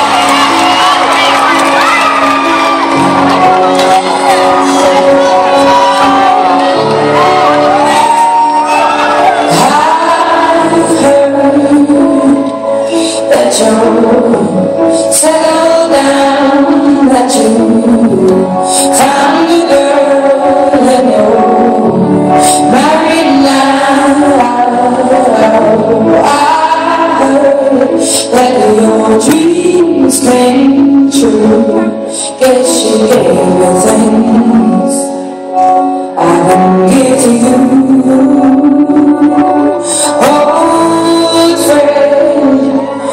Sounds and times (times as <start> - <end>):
Music: 0.0 - 43.1
Female singing: 9.2 - 35.1, 36.2 - 43.1.